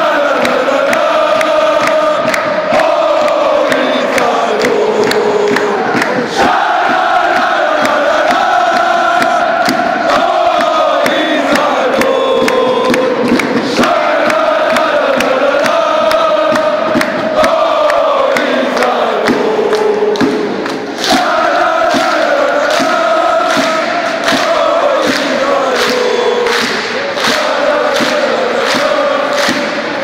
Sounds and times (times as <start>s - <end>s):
Music: 0.0s - 30.0s.